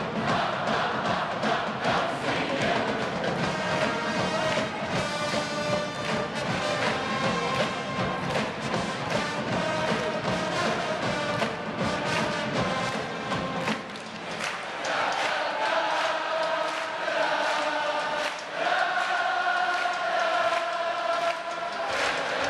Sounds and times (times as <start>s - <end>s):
Chant: 0.0s - 22.5s.